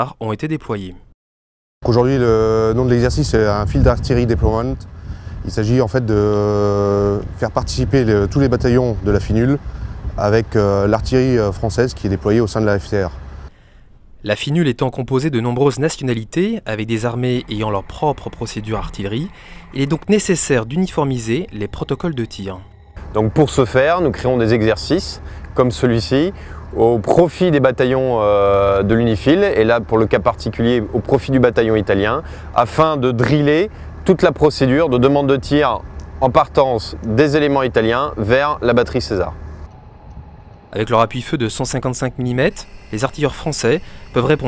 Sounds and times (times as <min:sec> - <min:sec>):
Speech: 0:00.0 - 0:01.1, 0:01.8 - 0:09.6, 0:10.2 - 0:13.2, 0:14.2 - 0:39.4, 0:40.8 - 0:44.4
Outside, urban or manmade: 0:01.8 - 0:44.4.